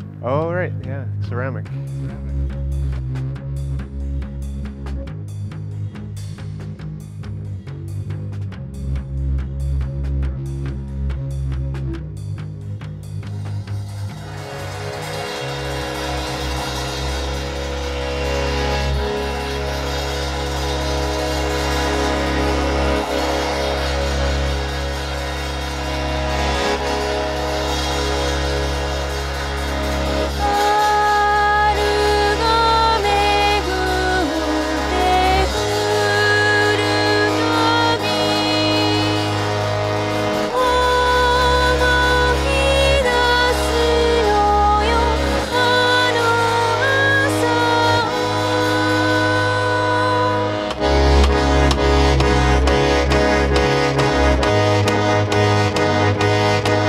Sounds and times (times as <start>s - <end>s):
Music: 0.0s - 56.8s
Speech: 0.2s - 2.4s.